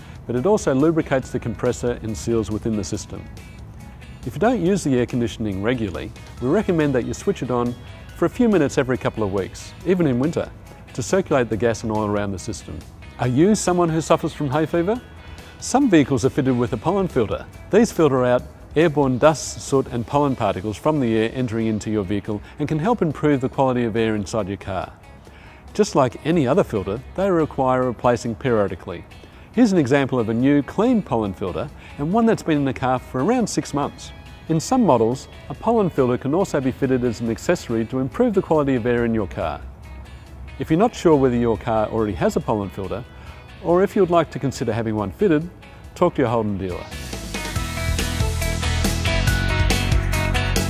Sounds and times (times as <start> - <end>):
Music: 0.0 - 50.6
Speech: 0.3 - 3.3, 4.3 - 15.0, 15.6 - 25.0, 25.8 - 29.0, 29.6 - 39.6, 40.6 - 43.0, 43.6 - 46.9.